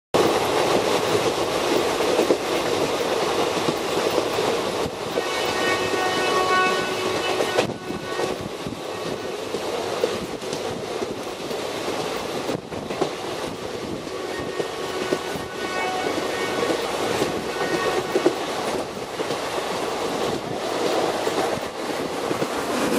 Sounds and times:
Outside, rural or natural: 0.1s - 22.9s
Railroad car, train wagon: 0.1s - 22.9s
Train: 0.1s - 22.9s.

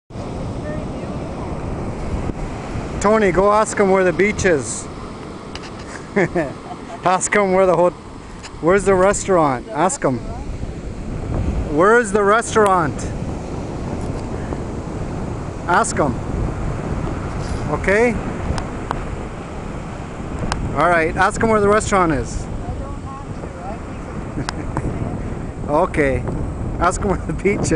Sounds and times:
Wind noise (microphone): 0.1s - 4.9s, 8.3s - 27.7s
Waves, surf: 0.1s - 27.7s.

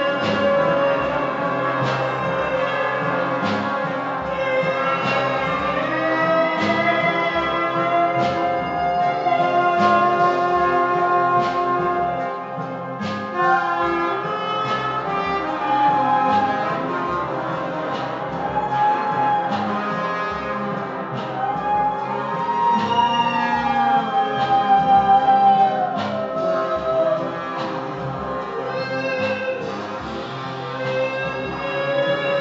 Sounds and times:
Trombone: 0.0s - 32.4s.

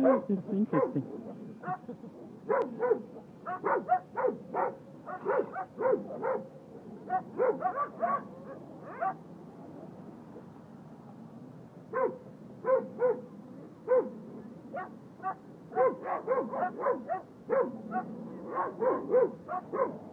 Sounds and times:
Bow-wow: 0.0s - 1.0s, 2.5s - 6.5s, 7.1s - 9.2s, 12.0s - 13.2s, 13.9s - 14.2s, 14.8s - 20.0s.

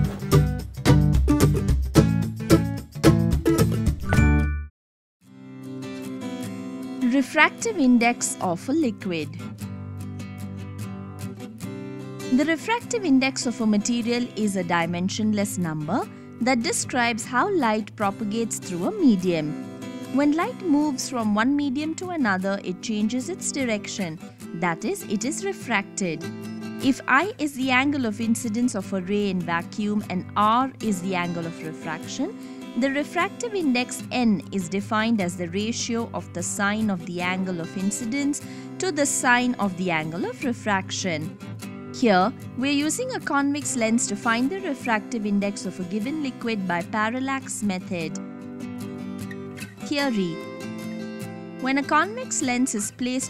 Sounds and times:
Music: 0.0s - 53.2s
Speech: 7.0s - 9.4s, 12.3s - 19.6s, 20.2s - 26.2s, 26.8s - 41.3s, 42.0s - 48.2s, 49.8s - 50.4s, 51.6s - 53.2s.

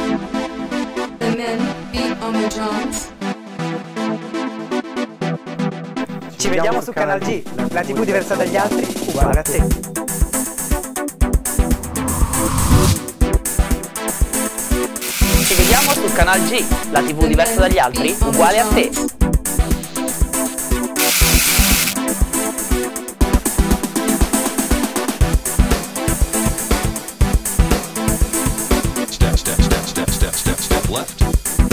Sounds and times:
Music: 0.0s - 31.7s
Speech: 1.2s - 3.1s, 6.3s - 9.7s, 15.2s - 19.1s, 29.0s - 31.4s.

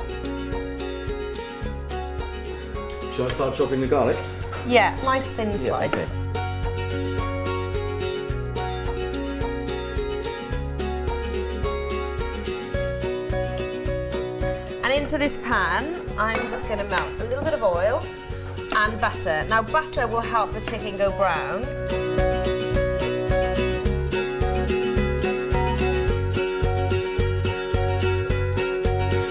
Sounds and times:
Music: 0.0s - 29.3s.

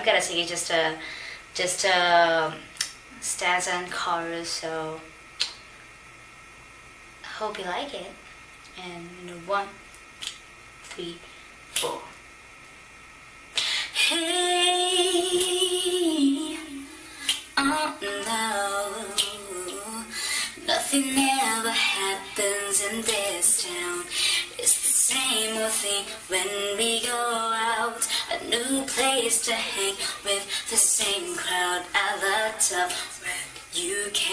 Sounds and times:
Speech: 0.0s - 1.0s, 1.6s - 5.1s, 7.2s - 9.8s, 10.9s - 12.2s.

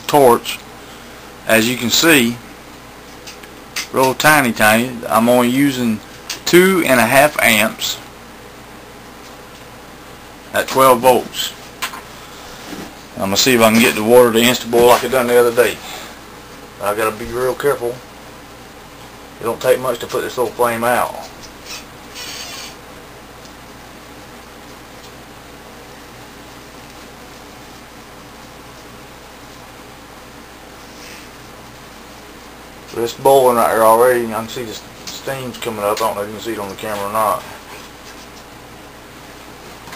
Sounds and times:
Speech: 0.0s - 0.6s, 1.5s - 2.4s, 3.9s - 8.1s, 10.5s - 11.6s, 13.2s - 15.9s, 16.8s - 18.1s, 19.4s - 21.4s, 32.9s - 37.6s.

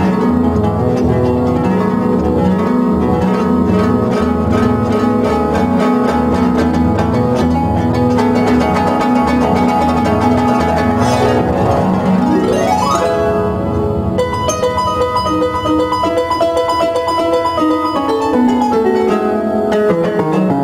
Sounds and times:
Harp: 0.0s - 20.6s.

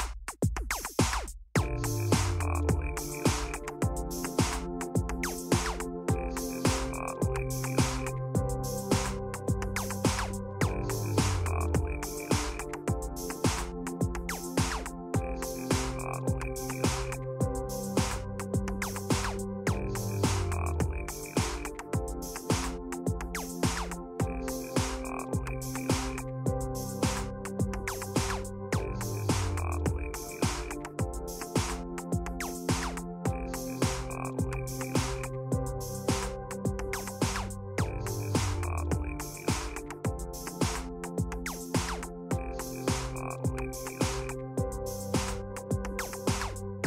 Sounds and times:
Pop music: 1.6s - 46.8s.

